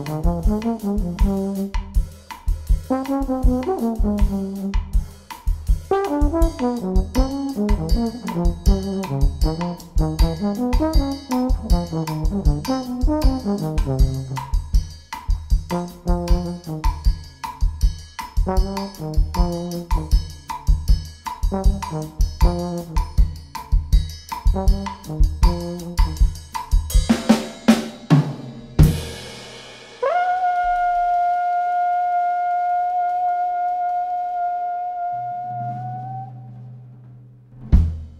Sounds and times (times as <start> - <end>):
Trombone: 0.0 - 27.9, 28.7 - 36.7.